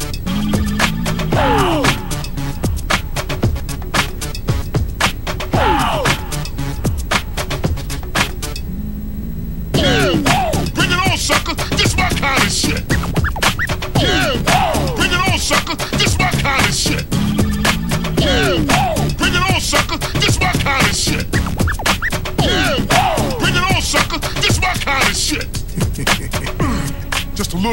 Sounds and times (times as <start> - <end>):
Music: 0.0 - 8.7, 9.8 - 27.7.